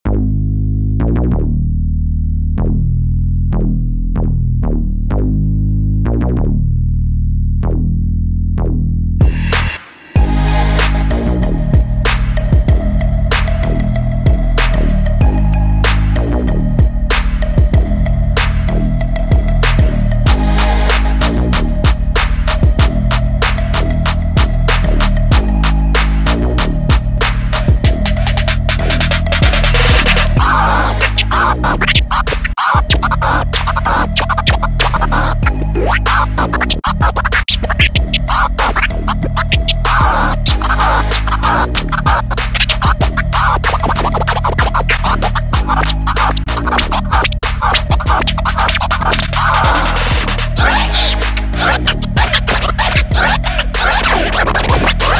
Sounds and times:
Hip hop music: 9.2s - 55.1s
House music: 9.2s - 55.1s.

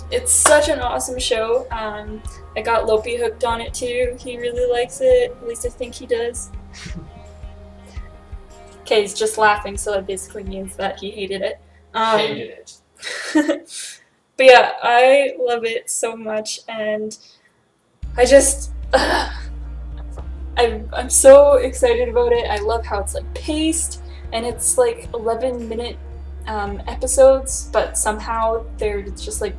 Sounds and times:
Music: 0.0s - 12.8s, 18.0s - 29.5s
Speech: 0.1s - 7.0s, 8.9s - 12.8s, 14.4s - 17.2s, 18.2s - 19.1s, 20.6s - 29.5s.

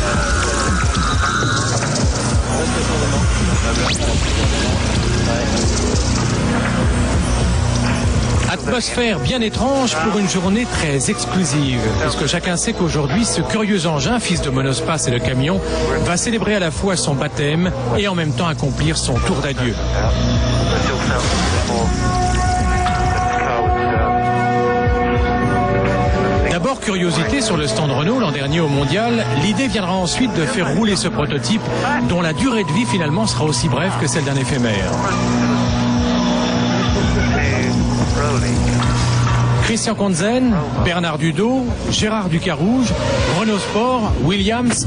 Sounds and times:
Music: 0.0s - 44.8s
Speech: 8.5s - 22.5s, 23.1s - 24.3s, 26.3s - 35.2s, 39.6s - 44.8s.

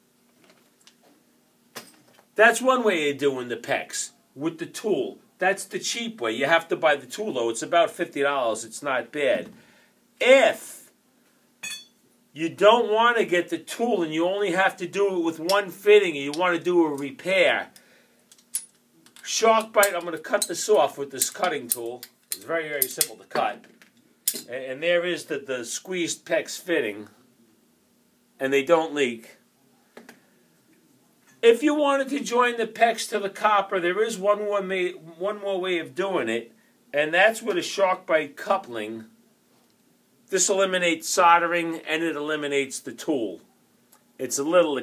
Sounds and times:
Speech: 2.4s - 9.5s, 10.2s - 10.9s, 12.4s - 17.8s, 19.2s - 23.6s, 24.4s - 27.2s, 28.4s - 29.4s, 31.4s - 39.1s, 40.3s - 43.5s, 44.2s - 44.8s.

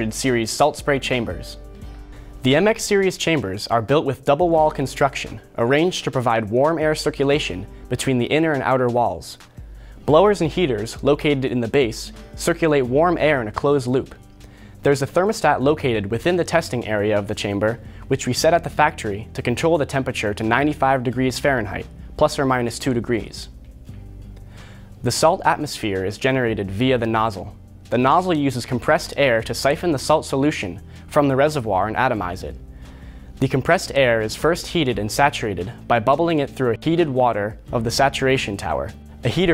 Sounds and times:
Speech: 0.0s - 1.6s, 2.4s - 9.4s, 10.1s - 14.2s, 14.8s - 23.5s, 25.0s - 32.6s, 33.4s - 39.5s.

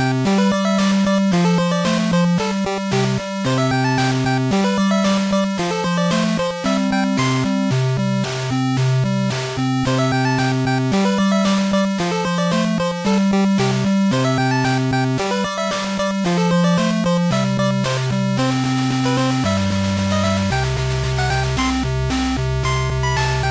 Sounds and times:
Soundtrack music: 0.0s - 23.5s.

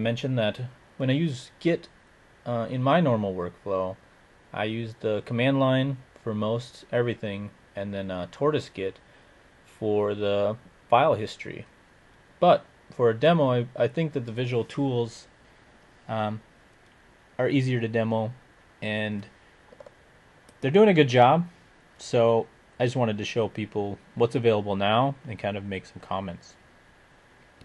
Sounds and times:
Speech: 0.0s - 1.9s, 2.5s - 9.0s, 9.7s - 11.7s, 12.4s - 15.3s, 16.1s - 16.4s, 17.4s - 19.4s, 20.6s - 26.6s.

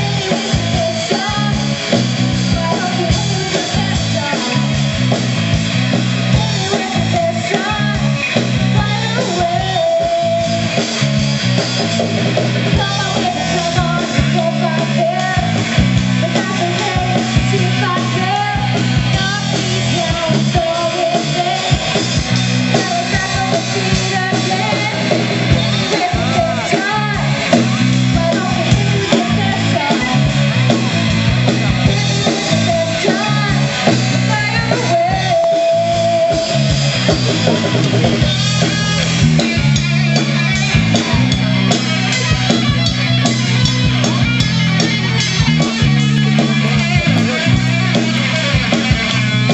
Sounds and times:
Music: 0.0s - 49.5s.

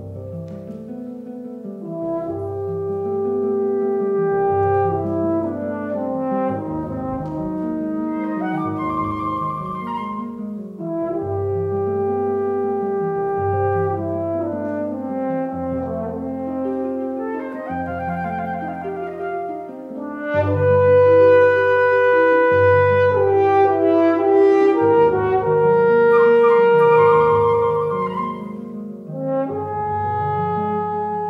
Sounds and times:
Classical music: 0.0s - 31.3s
Piano: 0.0s - 31.3s
French horn: 1.4s - 31.3s
Flute: 2.0s - 11.0s, 16.0s - 29.8s.

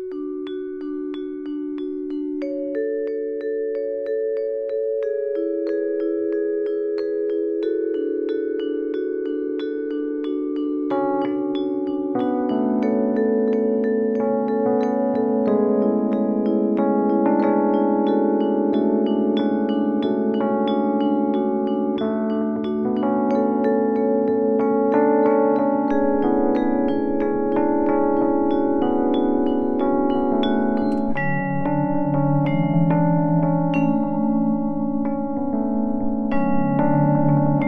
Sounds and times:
Music: 0.0s - 37.6s.

